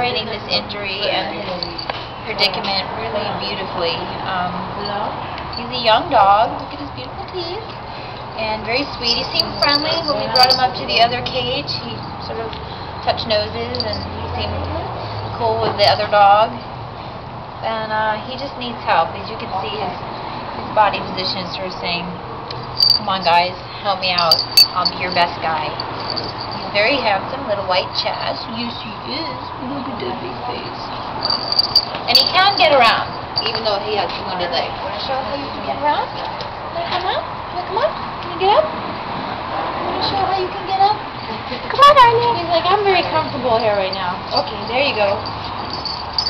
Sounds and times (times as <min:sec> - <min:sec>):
Speech: 0:08.4 - 0:12.5.